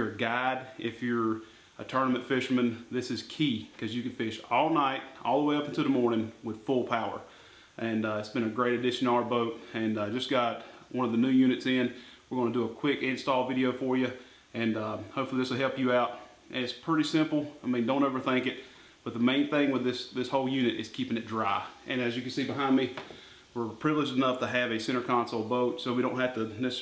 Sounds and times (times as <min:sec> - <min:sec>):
Speech: 0:00.0 - 0:23.0, 0:23.6 - 0:26.8.